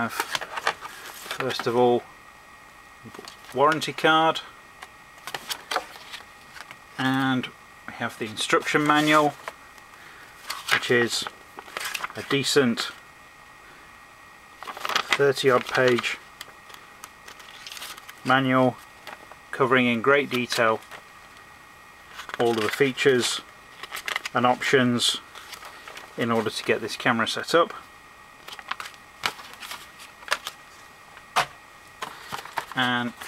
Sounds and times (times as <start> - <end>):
Speech: 1.4 - 2.1, 3.0 - 4.5, 7.0 - 9.4, 10.8 - 11.3, 12.2 - 13.0, 15.1 - 16.2, 18.2 - 18.8, 19.5 - 20.8, 22.4 - 23.5, 24.3 - 25.2, 26.2 - 27.9, 32.8 - 33.2.